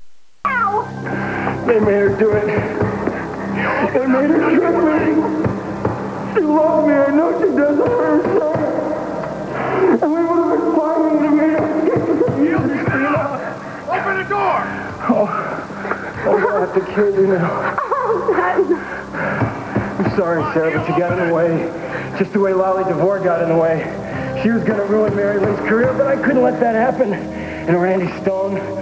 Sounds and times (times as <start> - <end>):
Music: 0.4 - 28.8.